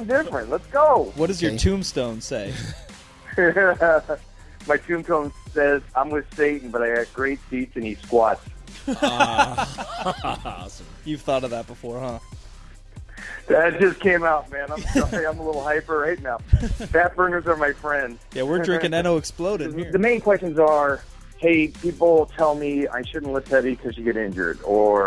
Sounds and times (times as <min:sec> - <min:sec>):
Speech: 0:00.0 - 0:02.8, 0:04.7 - 0:08.4, 0:09.1 - 0:12.2, 0:13.5 - 0:25.0
Music: 0:00.0 - 0:25.0.